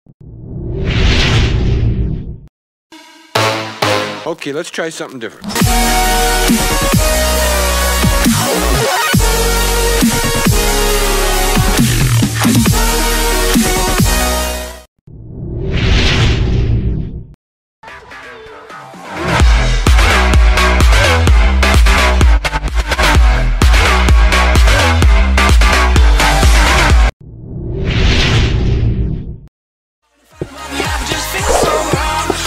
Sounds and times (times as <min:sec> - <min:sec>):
Music: 0:02.9 - 0:04.5, 0:05.4 - 0:14.9, 0:17.8 - 0:27.2, 0:30.0 - 0:32.4
Speech: 0:04.2 - 0:05.5.